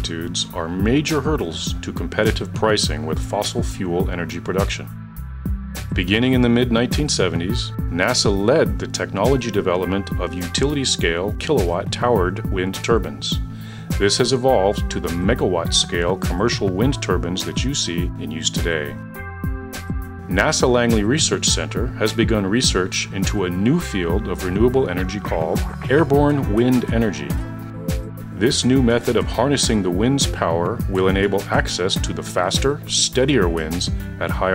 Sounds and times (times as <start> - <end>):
Speech: 0.0 - 4.9, 5.9 - 19.0, 20.3 - 27.4, 28.4 - 34.5
Music: 0.0 - 34.5.